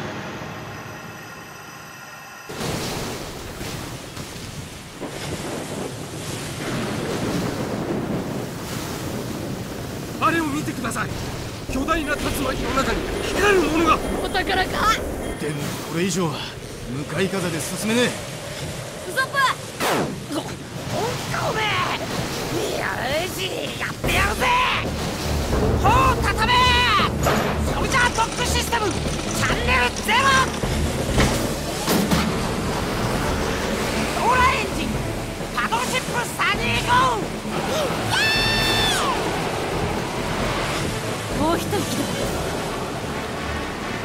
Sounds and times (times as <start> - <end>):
Music: 24.0 - 44.0.